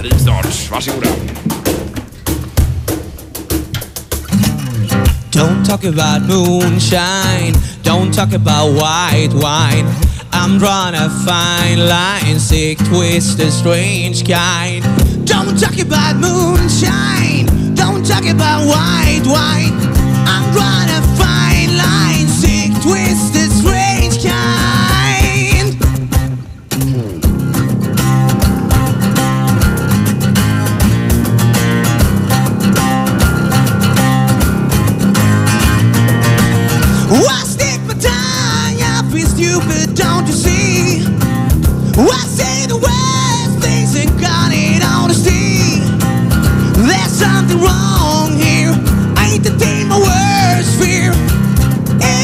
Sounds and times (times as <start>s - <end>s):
Music: 0.0s - 52.2s.